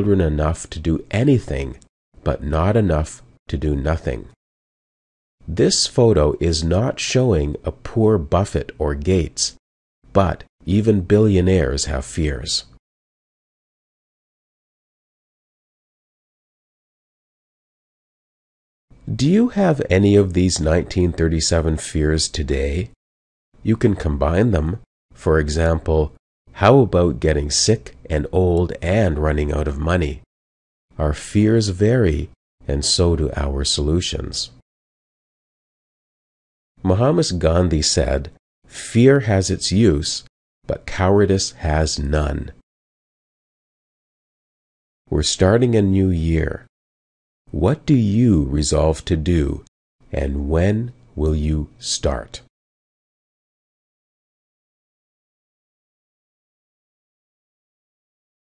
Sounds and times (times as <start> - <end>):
Speech synthesizer: 0.0 - 4.4, 5.5 - 9.6, 10.2 - 12.8, 19.1 - 23.0, 23.7 - 30.2, 31.0 - 34.6, 36.8 - 42.6, 45.1 - 46.7, 47.6 - 52.5.